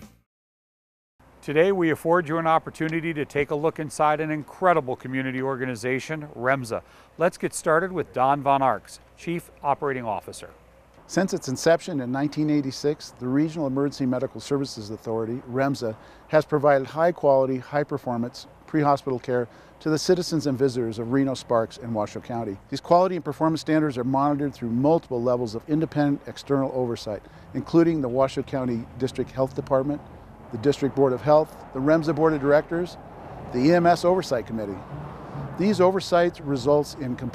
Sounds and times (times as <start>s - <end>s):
Speech: 1.4s - 30.0s, 30.6s - 33.0s, 33.6s - 34.8s, 35.6s - 37.3s.